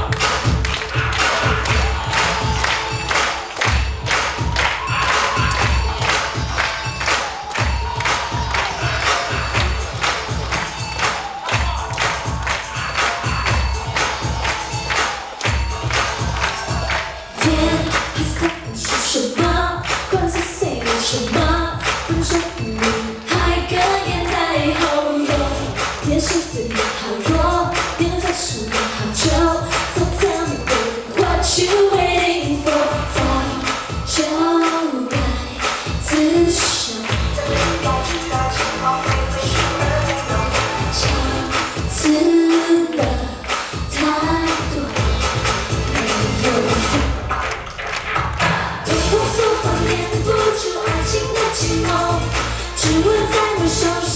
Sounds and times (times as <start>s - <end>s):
Choir: 0.0s - 47.3s, 48.4s - 54.1s
Female singing: 16.8s - 45.2s, 45.8s - 47.2s, 48.4s - 54.1s.